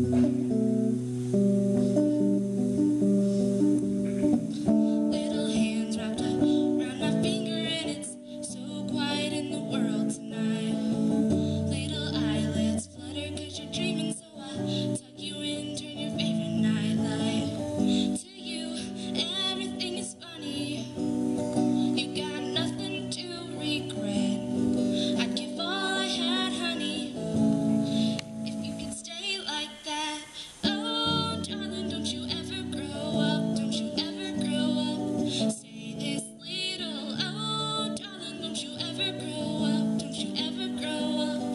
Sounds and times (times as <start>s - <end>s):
Music: 0.0s - 41.5s
Female singing: 4.6s - 41.5s.